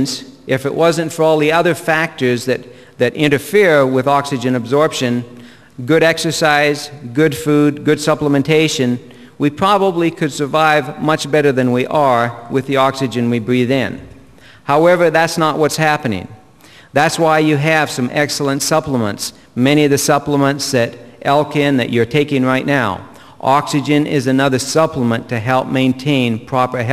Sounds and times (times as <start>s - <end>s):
Speech: 0.0s - 14.1s, 14.7s - 16.4s, 17.0s - 26.9s.